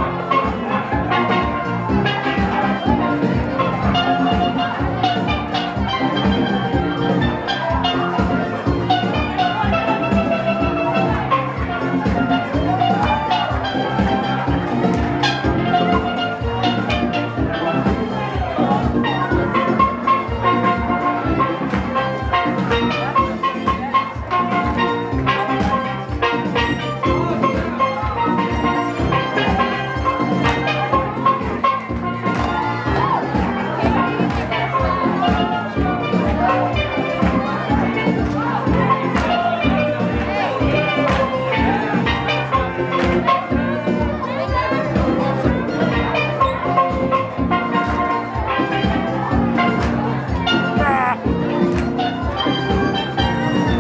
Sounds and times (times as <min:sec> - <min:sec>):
Crowd: 0:00.0 - 0:53.8
Drum: 0:00.0 - 0:53.8
Steelpan: 0:00.0 - 0:53.8.